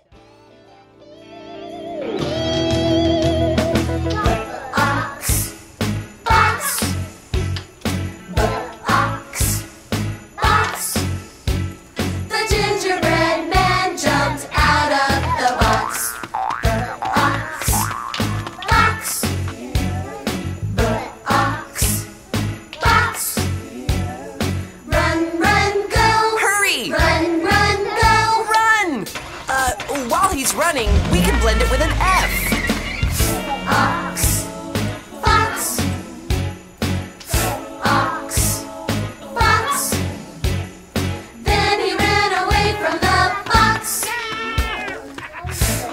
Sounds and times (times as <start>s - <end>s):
Music: 0.0s - 45.9s
Speech: 28.4s - 32.5s.